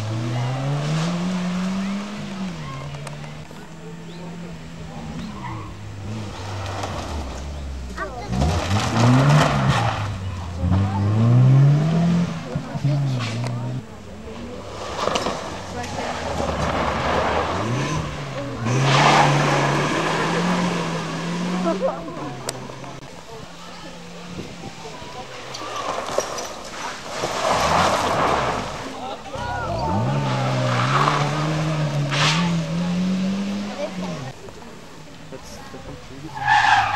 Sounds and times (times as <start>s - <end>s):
Race car, auto racing: 0.0s - 36.9s
Speech: 1.6s - 5.8s, 7.9s - 8.7s, 10.2s - 26.1s, 28.6s - 36.9s.